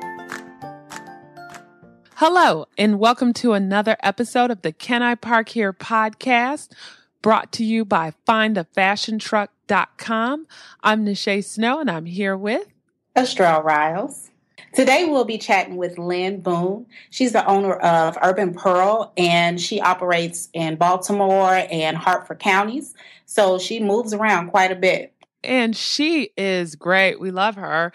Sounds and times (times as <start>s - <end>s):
Speech: 2.2s - 27.9s.